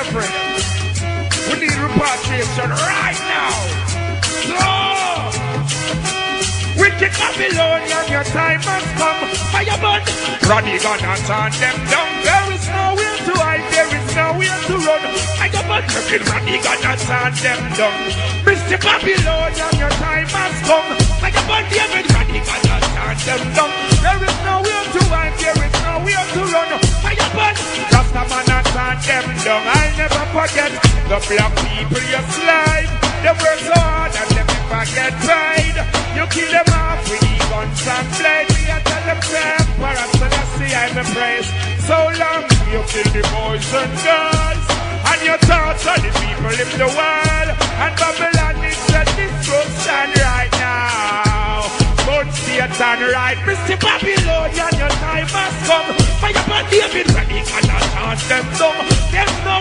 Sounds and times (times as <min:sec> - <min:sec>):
Music: 0:00.0 - 0:59.6.